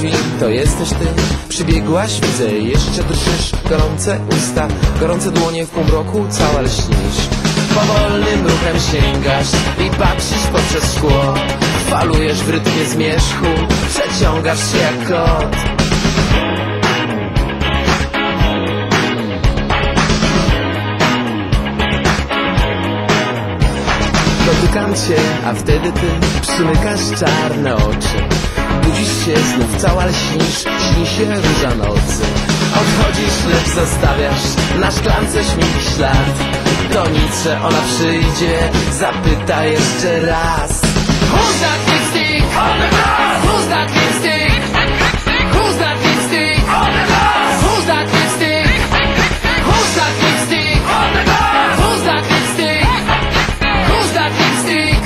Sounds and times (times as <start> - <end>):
Music: 0.0 - 55.0.